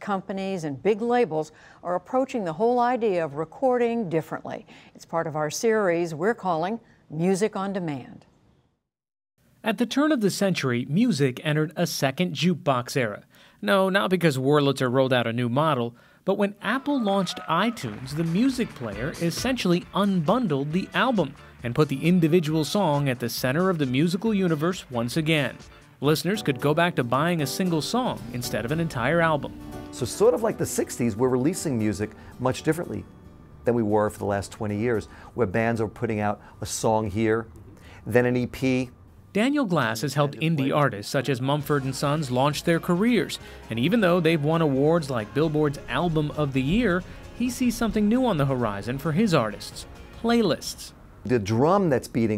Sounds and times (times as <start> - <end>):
Speech: 9.6 - 33.0, 38.1 - 52.3
Music: 16.6 - 52.3.